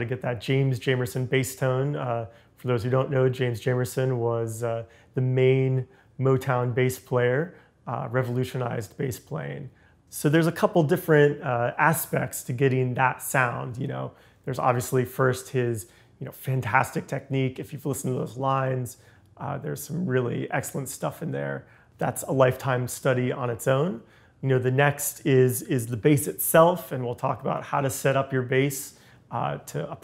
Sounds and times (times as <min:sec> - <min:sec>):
Speech: 0:00.0 - 0:30.0.